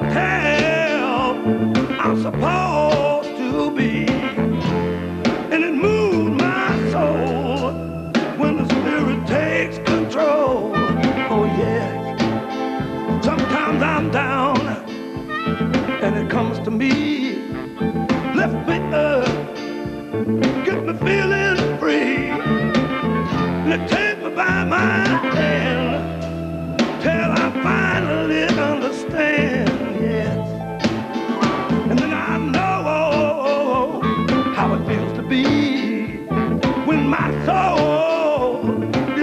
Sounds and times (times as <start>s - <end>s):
Music: 0.0s - 39.2s.